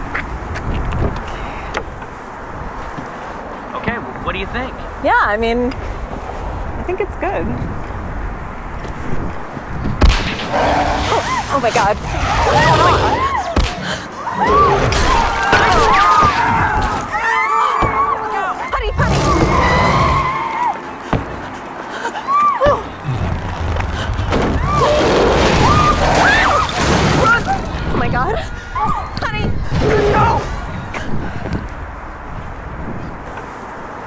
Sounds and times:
Motor vehicle (road): 0.0s - 34.0s.

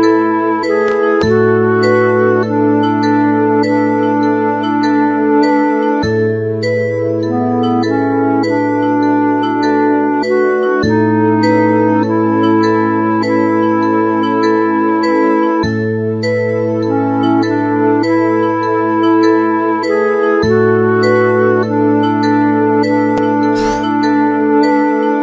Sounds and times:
Music: 0.0s - 25.2s.

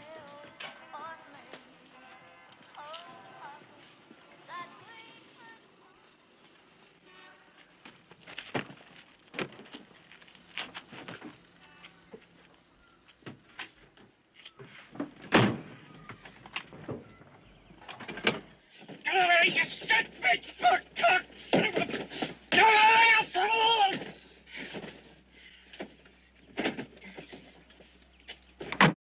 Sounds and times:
Speech: 19.1s - 24.1s.

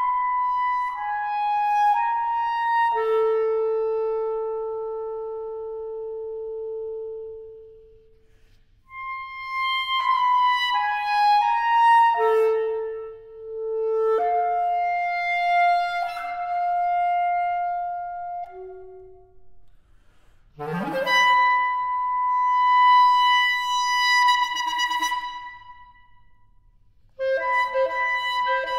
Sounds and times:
Flute: 0.0s - 19.8s, 20.6s - 28.7s.

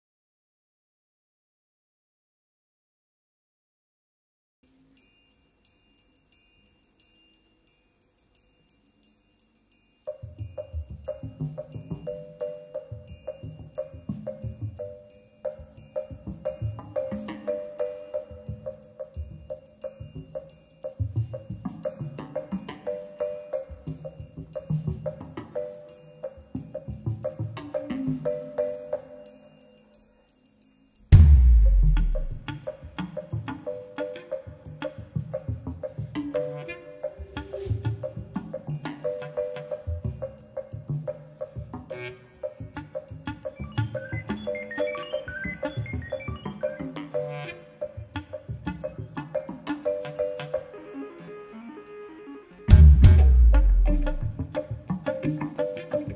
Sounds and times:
Marimba, xylophone: 4.7s - 56.1s.

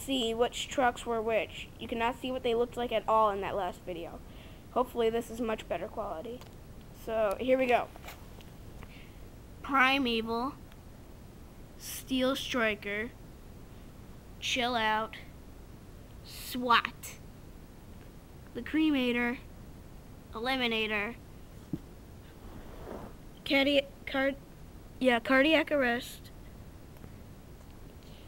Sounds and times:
Speech: 0.0s - 8.0s, 9.6s - 10.6s, 11.8s - 13.2s, 14.4s - 15.3s, 16.3s - 17.2s, 18.5s - 19.5s, 20.3s - 21.2s, 23.4s - 24.4s, 25.0s - 26.3s.

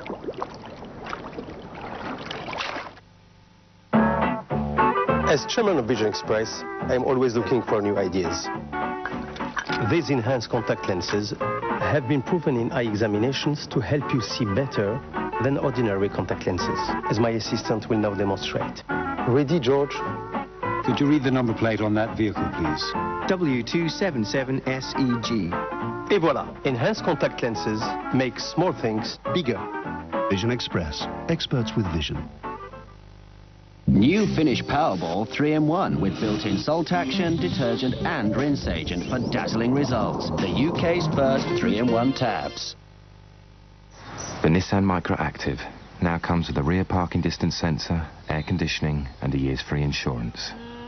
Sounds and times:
Music: 3.9s - 43.3s
Speech: 5.3s - 8.5s, 9.8s - 20.0s, 20.8s - 29.7s, 30.3s - 32.3s, 33.9s - 42.8s, 44.4s - 50.6s.

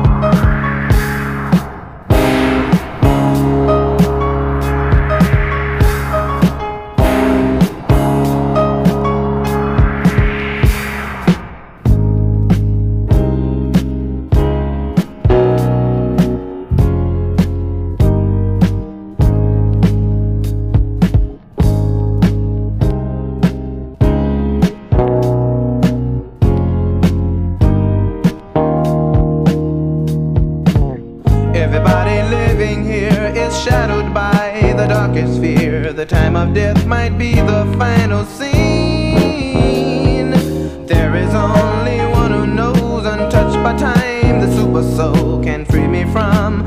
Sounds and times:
Music: 0.0s - 46.6s.

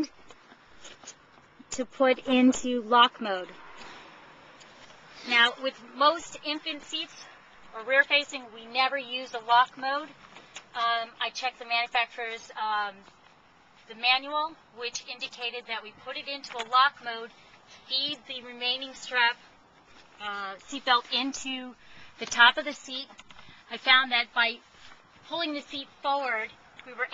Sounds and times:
Speech: 1.7s - 3.6s, 5.3s - 10.1s, 10.8s - 13.0s, 13.9s - 17.3s, 17.9s - 19.4s, 20.2s - 23.1s, 23.7s - 24.6s, 25.3s - 27.1s.

